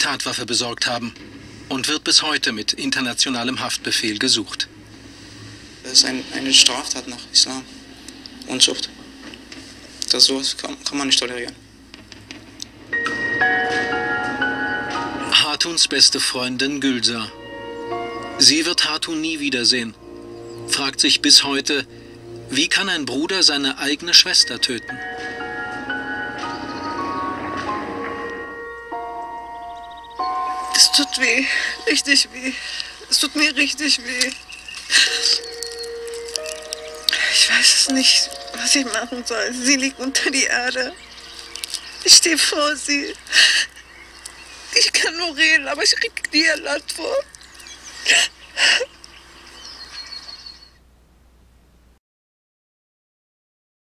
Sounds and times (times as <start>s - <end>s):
Outside, rural or natural: 0.0s - 51.3s.